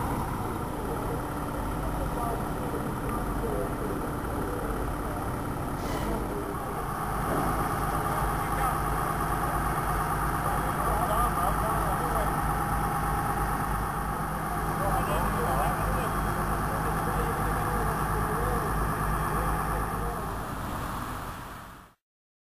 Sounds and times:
Vehicle: 0.0s - 22.0s
Speech: 0.6s - 6.8s, 7.9s - 9.0s, 10.3s - 12.5s, 14.4s - 20.4s.

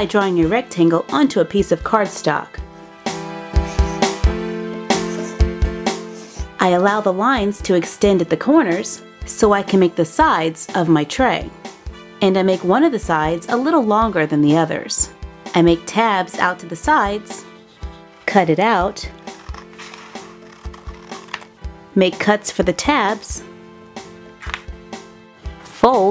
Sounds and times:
Speech: 0.0s - 2.6s, 6.6s - 11.5s, 12.2s - 17.5s, 18.3s - 19.1s, 22.0s - 23.5s, 25.8s - 26.1s
Music: 0.0s - 26.1s.

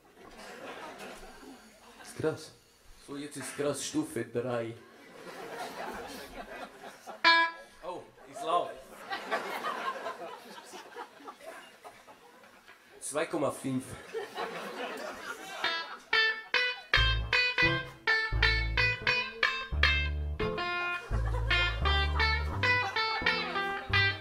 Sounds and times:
Guitar: 7.2s - 7.9s, 15.6s - 24.2s.

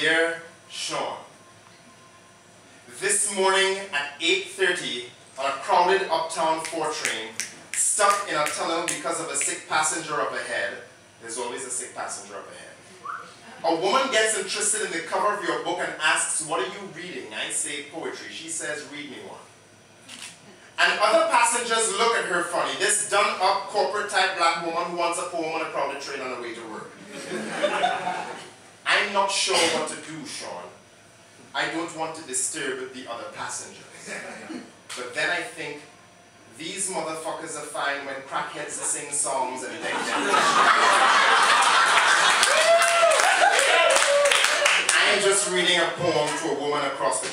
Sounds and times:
Speech: 0.0s - 1.3s, 2.9s - 12.8s, 13.6s - 19.5s, 20.8s - 27.0s, 28.8s - 30.8s, 31.5s - 34.0s, 35.0s - 35.9s, 36.5s - 40.2s, 44.9s - 47.3s.

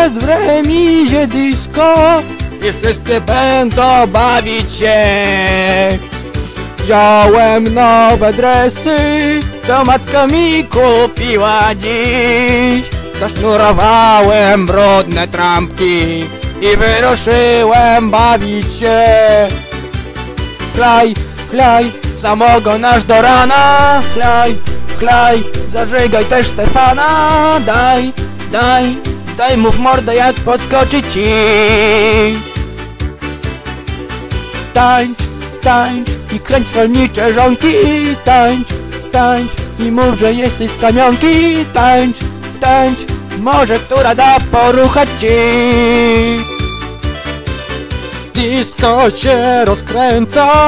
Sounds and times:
Music: 0.0s - 50.6s.

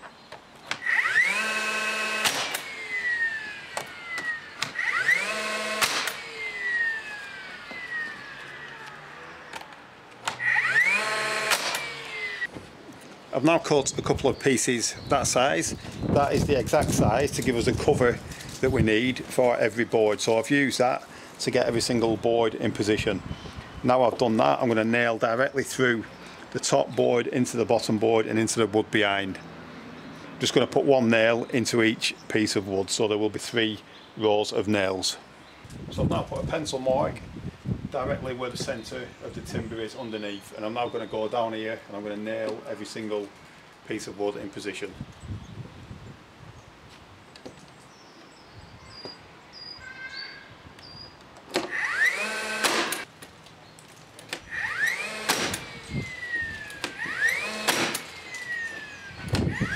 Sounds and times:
Power tool: 0.7s - 12.5s, 51.5s - 53.1s, 54.3s - 59.7s.

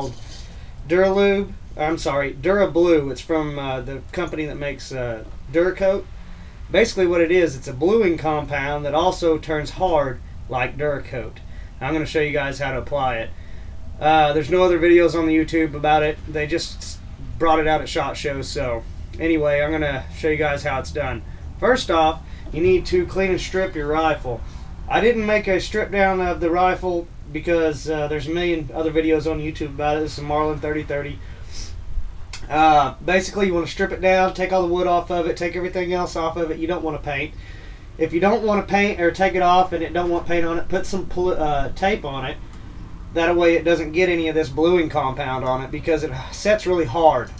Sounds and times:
Speech: 0.0s - 6.1s, 6.7s - 13.3s, 14.0s - 31.7s, 32.4s - 37.4s, 38.0s - 42.4s, 43.1s - 47.3s.

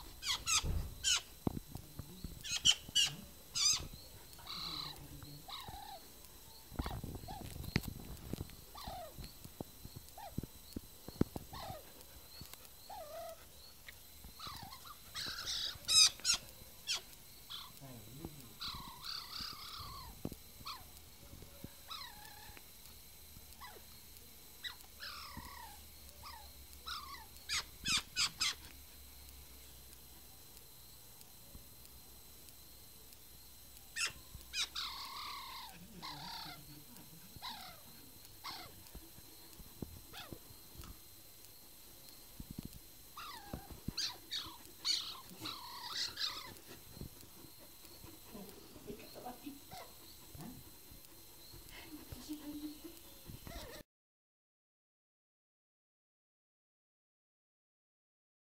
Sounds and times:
Animal: 0.0s - 33.2s, 33.8s - 53.8s.

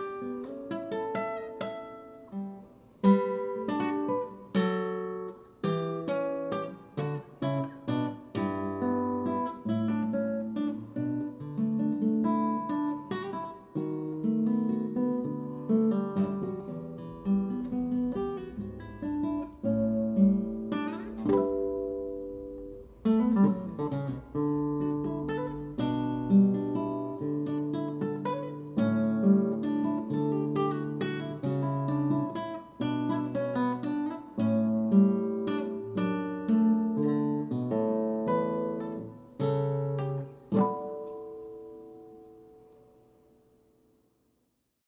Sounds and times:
Acoustic guitar: 0.0s - 44.4s
Strum: 13.2s - 41.5s.

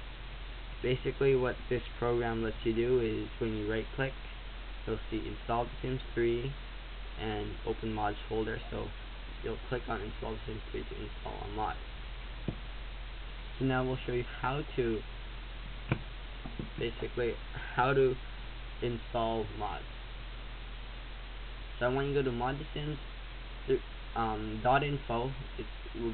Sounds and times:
Speech: 0.8s - 4.2s, 4.8s - 6.6s, 7.2s - 11.8s, 13.6s - 15.0s, 16.6s - 18.2s, 18.8s - 19.9s, 21.8s - 23.1s, 23.7s - 26.1s.

